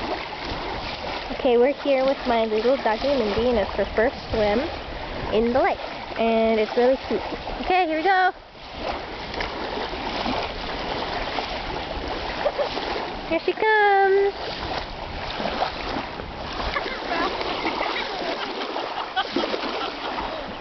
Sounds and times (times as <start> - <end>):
Speech: 1.3 - 4.7, 5.3 - 8.4, 13.3 - 14.4.